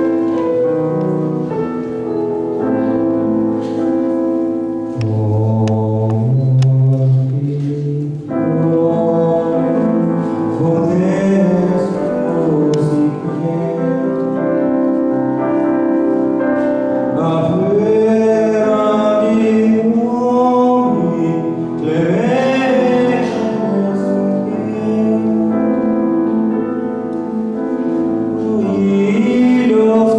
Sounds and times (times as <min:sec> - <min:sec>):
Vocal music: 0:00.0 - 0:30.1.